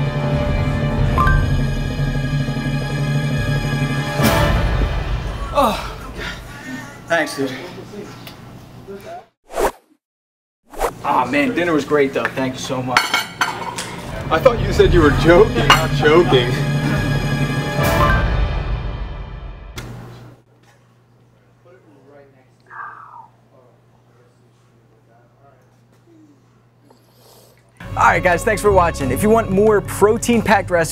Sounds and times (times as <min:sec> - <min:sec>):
Music: 0:00.0 - 0:06.4, 0:14.0 - 0:20.0, 0:27.8 - 0:30.9.